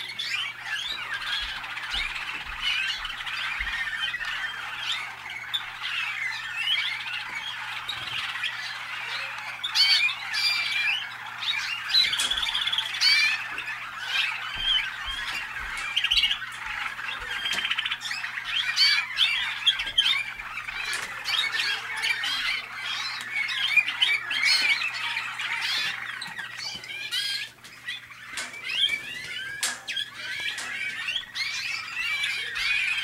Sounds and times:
Chirp, tweet: 0.0 - 33.0.

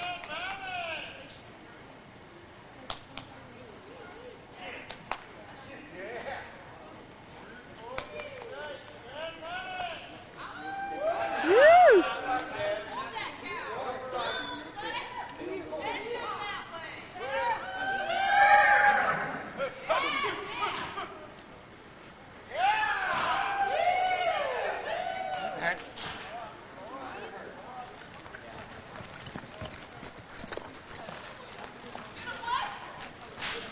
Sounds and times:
Clip-clop: 2.8 - 13.6, 14.2 - 23.5, 25.2 - 33.7.

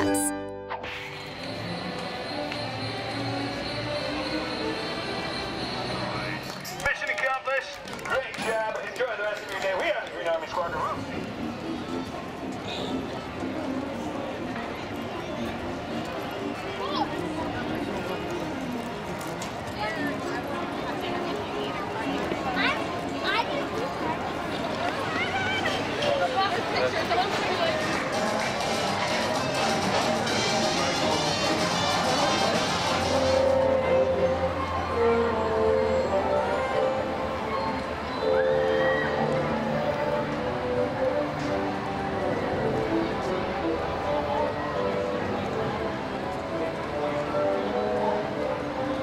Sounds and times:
Music: 0.0 - 49.0.

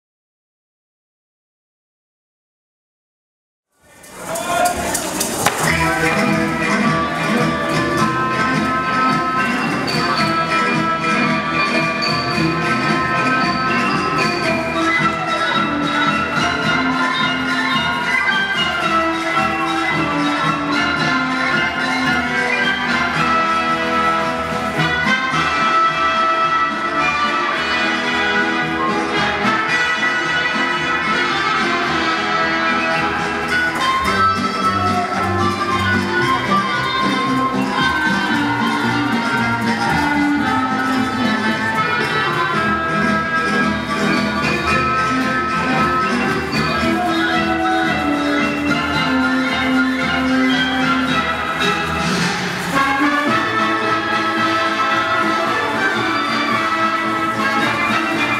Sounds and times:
Speech: 3.8 - 12.3, 34.0 - 50.3.

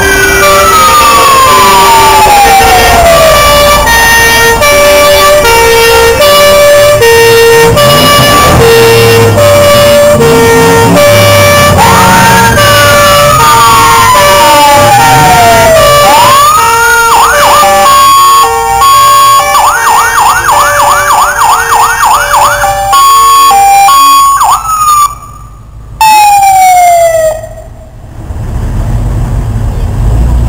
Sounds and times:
Fire engine, fire truck (siren): 0.0 - 28.2
Truck: 0.0 - 30.4.

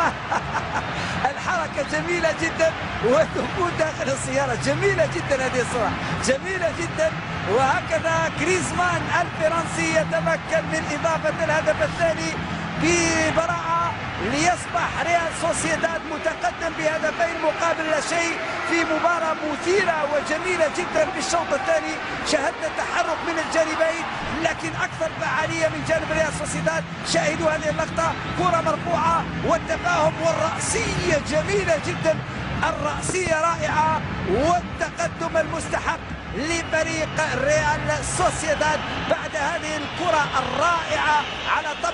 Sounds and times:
Speech: 1.2 - 41.9.

